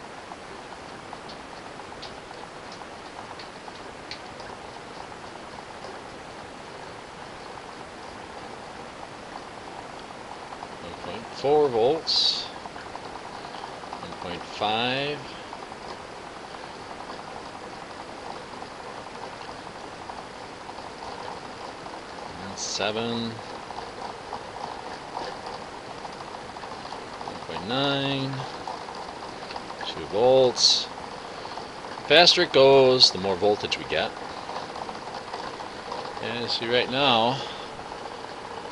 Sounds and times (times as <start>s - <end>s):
Speech: 10.8s - 12.6s, 14.0s - 15.3s, 22.4s - 23.4s, 27.3s - 28.5s, 29.8s - 30.9s, 32.1s - 34.2s, 36.2s - 37.5s.